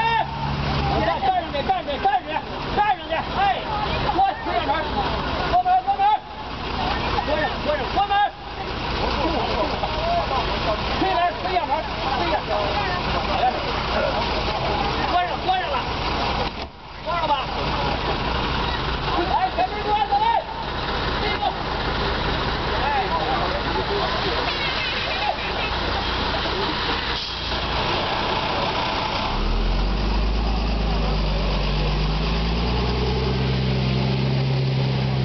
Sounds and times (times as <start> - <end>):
Speech: 0.0 - 16.0, 16.9 - 18.1, 18.8 - 20.6, 21.2 - 21.7, 22.6 - 27.2
Bus: 0.0 - 35.2.